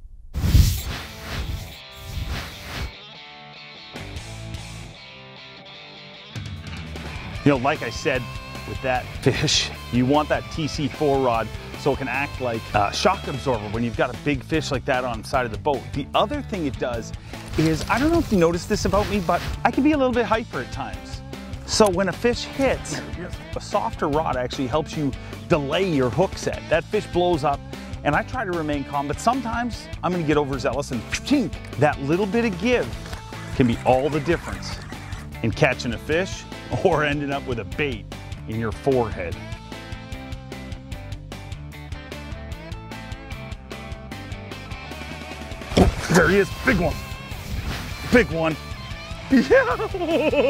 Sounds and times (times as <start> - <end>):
Music: 0.9 - 50.4
Speech: 7.4 - 32.9, 33.5 - 39.4, 46.0 - 47.0, 48.1 - 48.6.